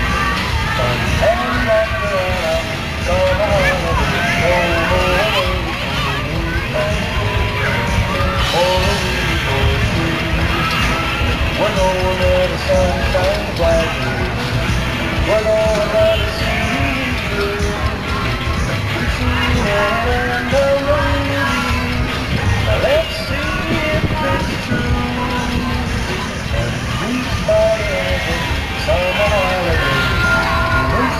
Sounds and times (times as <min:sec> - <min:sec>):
Music: 0:00.0 - 0:31.1.